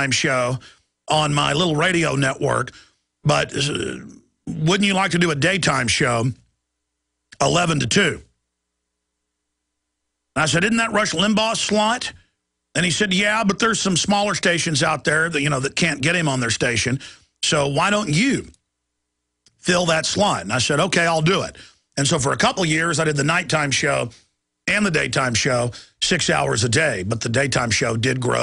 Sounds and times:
Speech: 0:00.0 - 0:06.5, 0:07.4 - 0:08.4, 0:10.4 - 0:18.6, 0:19.6 - 0:28.4.

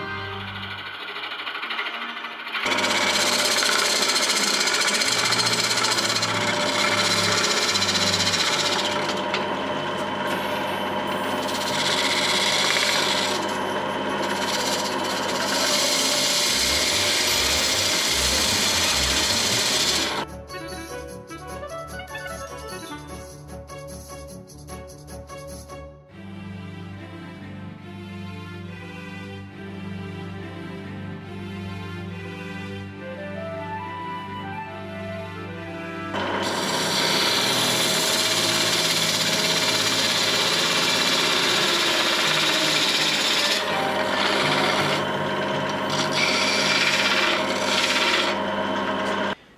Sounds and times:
Music: 0:00.0 - 0:02.7, 0:04.4 - 0:12.2, 0:16.5 - 0:47.0
Wood: 0:00.4 - 0:20.3, 0:36.2 - 0:49.4.

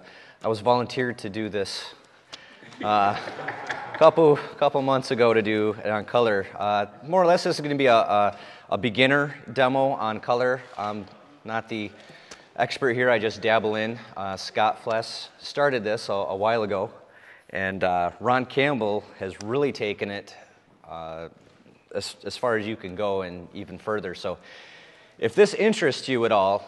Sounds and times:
Speech: 0:00.4 - 0:02.0, 0:02.8 - 0:03.4, 0:04.0 - 0:12.0, 0:12.6 - 0:24.4, 0:25.2 - 0:26.6.

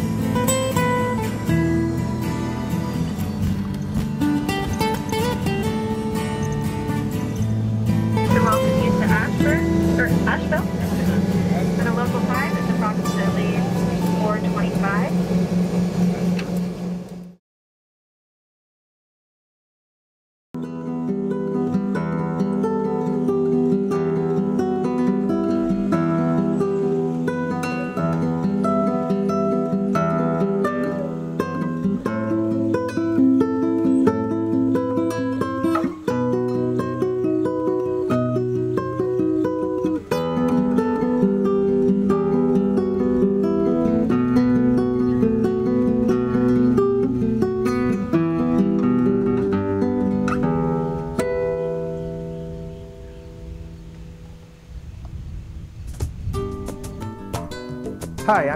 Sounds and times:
Music: 0:00.0 - 0:17.4, 0:20.6 - 0:58.5
Speech: 0:08.3 - 0:15.2, 0:58.2 - 0:58.5.

